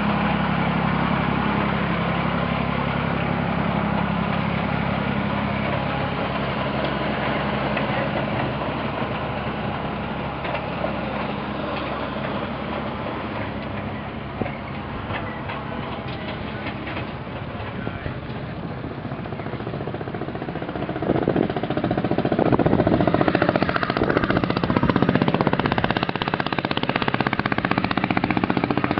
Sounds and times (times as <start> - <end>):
Engine: 0.0 - 28.9
Vehicle: 0.0 - 28.9.